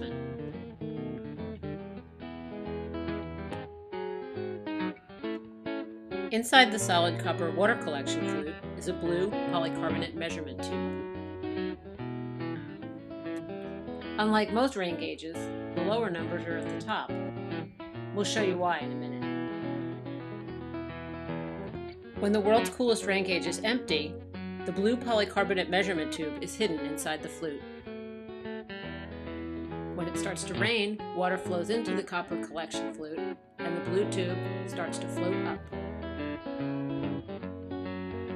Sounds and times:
Music: 0.0 - 38.3
Speech: 6.4 - 10.8, 14.2 - 17.1, 18.2 - 19.2, 22.2 - 27.6, 30.0 - 35.6.

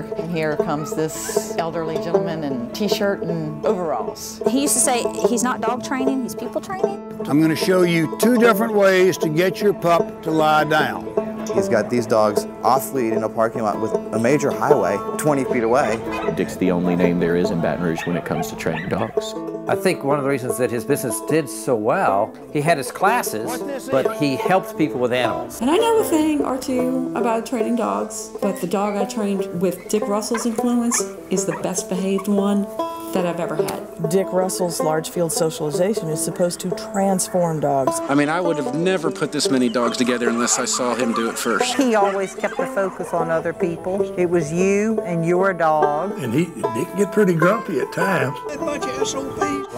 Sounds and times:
Music: 0.0 - 49.7
Bow-wow: 16.0 - 16.5, 17.8 - 19.2, 40.3 - 43.2
Yip: 18.0 - 19.2.

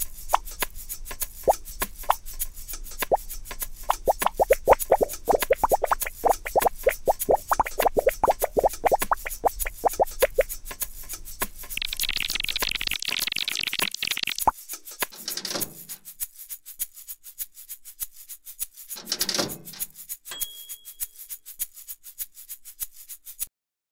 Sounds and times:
Music: 0.0 - 12.3, 14.6 - 23.3.

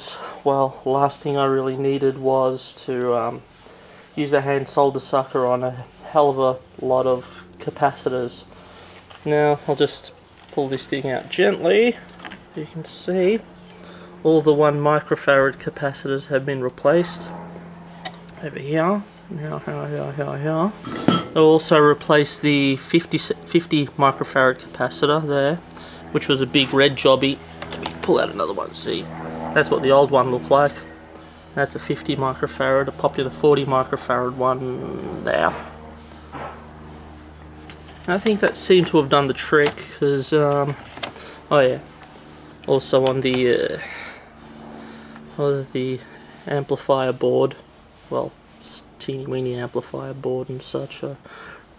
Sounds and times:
Speech: 0.0 - 3.4, 4.2 - 8.5, 9.2 - 13.5, 14.2 - 17.4, 18.3 - 30.9, 31.6 - 35.7, 38.1 - 40.8, 41.5 - 41.8, 42.7 - 44.1, 45.4 - 51.2.

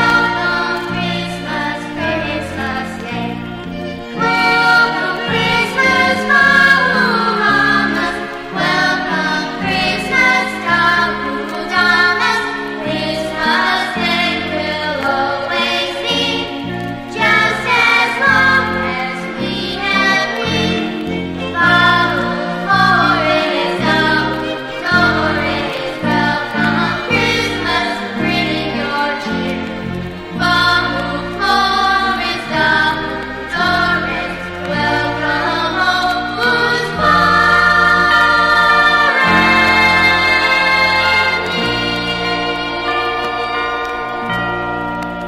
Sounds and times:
Music: 0.0 - 45.2.

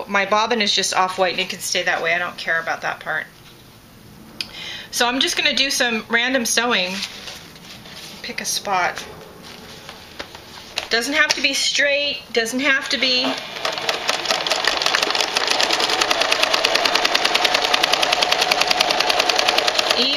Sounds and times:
Speech: 0.0 - 3.3, 5.0 - 7.0, 8.2 - 9.1, 10.9 - 13.4, 20.0 - 20.1
Sewing machine: 13.2 - 20.1.

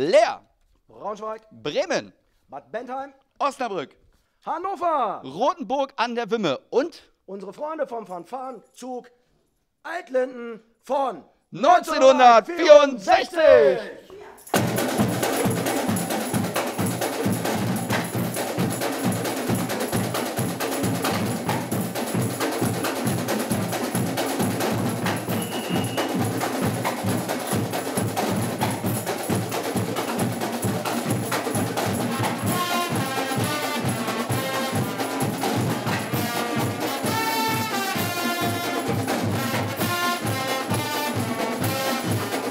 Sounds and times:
Speech: 0.0 - 9.1, 9.9 - 14.4.

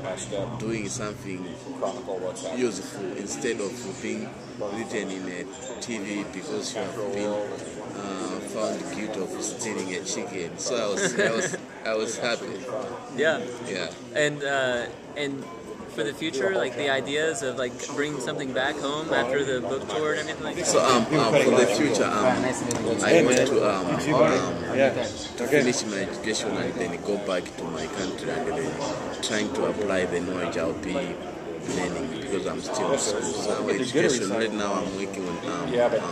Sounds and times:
Speech: 0.0 - 36.1.

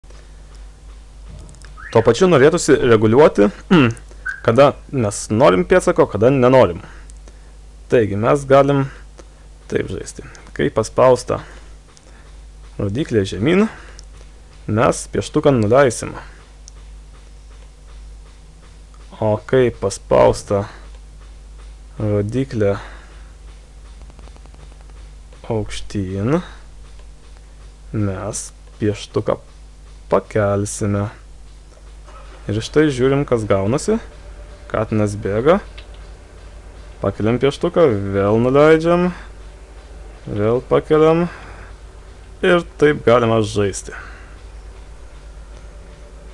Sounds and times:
Speech: 1.9 - 6.9, 7.9 - 9.0, 9.7 - 11.5, 12.8 - 13.8, 14.7 - 16.3, 19.1 - 20.8, 22.0 - 22.9, 25.4 - 26.6, 27.9 - 29.5, 30.1 - 31.2, 32.4 - 34.1, 34.7 - 35.7, 37.0 - 39.3, 40.3 - 41.4, 42.4 - 44.2.

